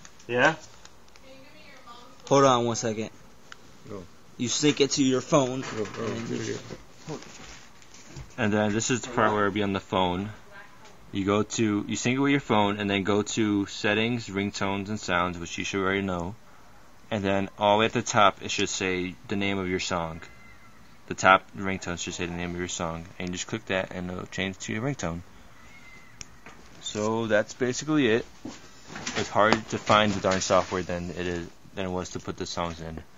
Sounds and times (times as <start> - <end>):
Speech: 8.4 - 16.4, 21.1 - 25.2, 26.8 - 28.3, 29.0 - 33.1.